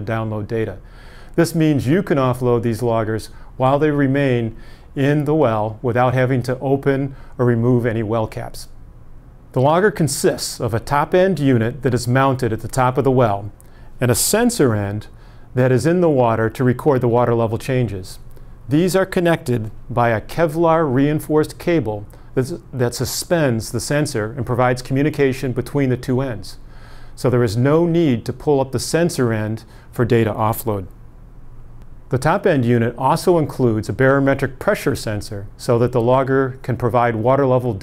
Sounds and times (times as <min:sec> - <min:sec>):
Speech: 0:00.0 - 0:00.8, 0:01.4 - 0:08.7, 0:09.6 - 0:26.6, 0:27.2 - 0:30.9, 0:32.1 - 0:37.8.